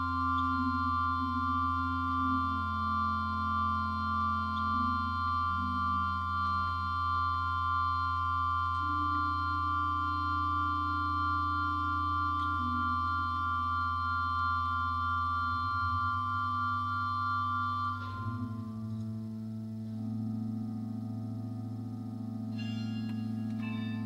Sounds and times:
Organ: 0.0s - 24.0s
Piano: 0.0s - 24.0s.

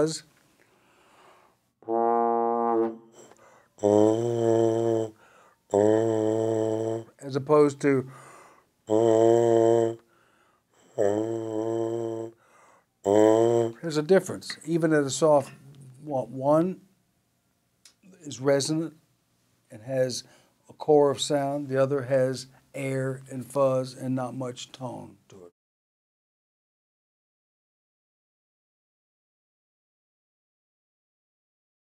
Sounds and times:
Speech: 0.0s - 0.3s, 13.8s - 16.9s, 18.1s - 19.0s, 19.7s - 25.5s.

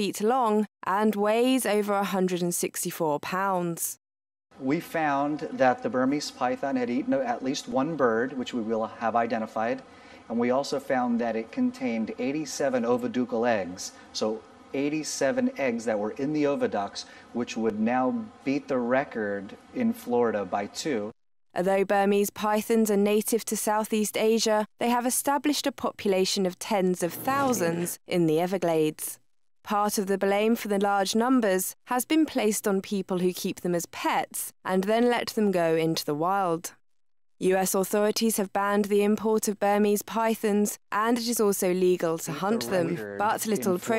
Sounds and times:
Speech: 0.0s - 4.0s, 10.4s - 36.7s, 37.4s - 43.9s.

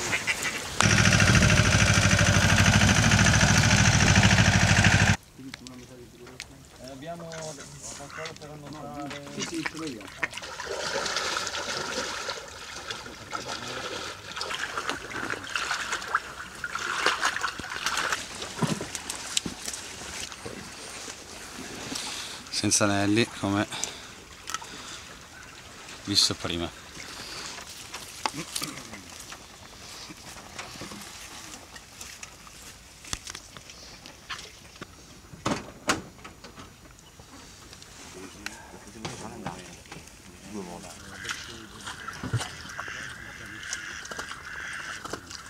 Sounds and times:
Speech: 5.4s - 10.3s, 22.5s - 23.7s, 26.1s - 26.8s, 28.4s - 29.2s, 38.2s - 42.0s.

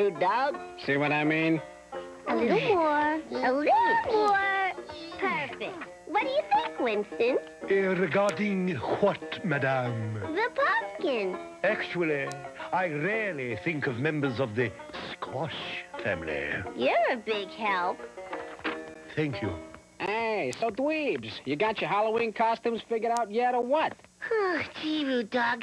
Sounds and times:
Music: 0.0s - 25.6s.

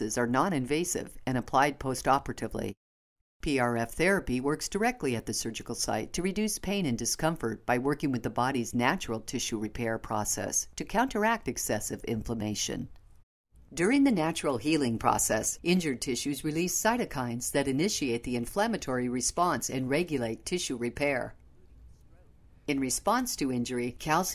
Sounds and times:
Speech: 0.0s - 2.8s, 3.4s - 12.9s, 13.8s - 21.4s, 22.1s - 24.3s.

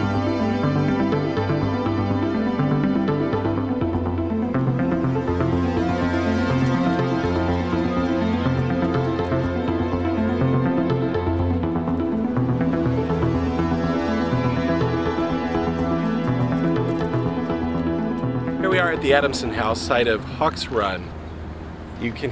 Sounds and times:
Music: 0.0s - 21.2s.

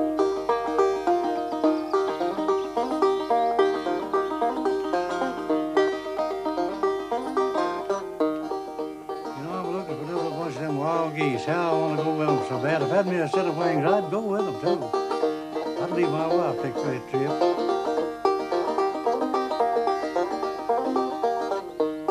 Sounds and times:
Music: 0.0s - 22.1s
Speech: 9.4s - 14.9s, 15.8s - 17.4s.

